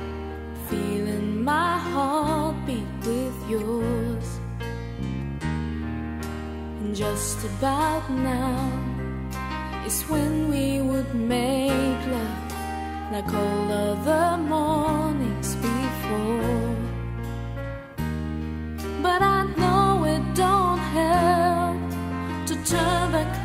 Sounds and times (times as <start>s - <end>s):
Music: 0.0s - 23.4s
Female singing: 0.6s - 4.4s, 6.8s - 9.0s, 9.9s - 17.0s, 19.0s - 23.4s.